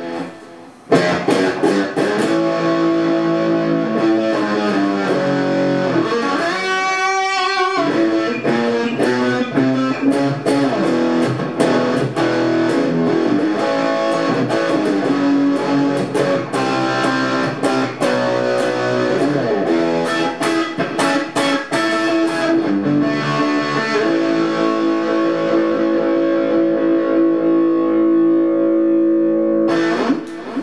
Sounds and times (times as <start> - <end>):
Strum: 0.0 - 30.6.